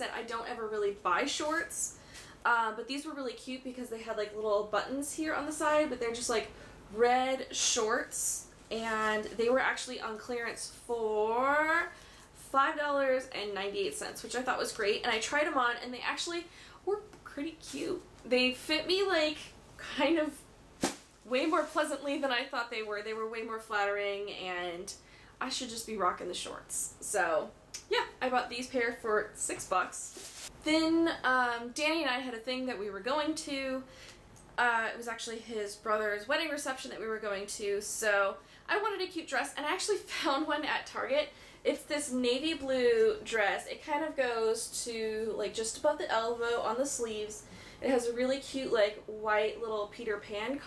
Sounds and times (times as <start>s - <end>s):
Speech: 0.0s - 20.4s, 21.3s - 33.9s, 34.6s - 50.6s
Inside, small room: 0.0s - 50.6s.